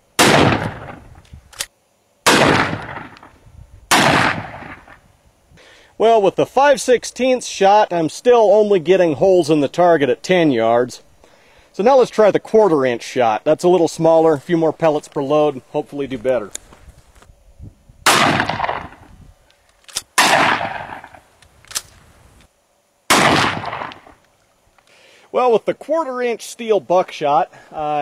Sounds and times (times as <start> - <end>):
Outside, rural or natural: 0.0 - 28.0
Speech: 6.0 - 11.0, 11.8 - 16.6, 25.3 - 28.0.